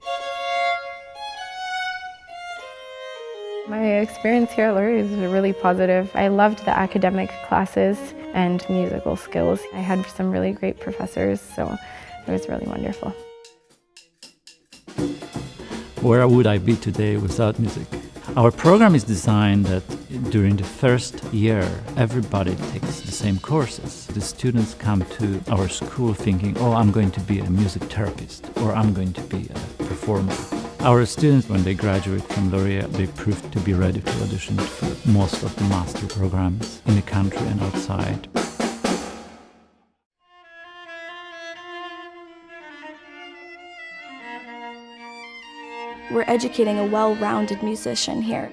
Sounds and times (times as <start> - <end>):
Music: 0.0 - 48.5
Speech: 3.7 - 13.2, 16.0 - 38.3, 46.1 - 48.5.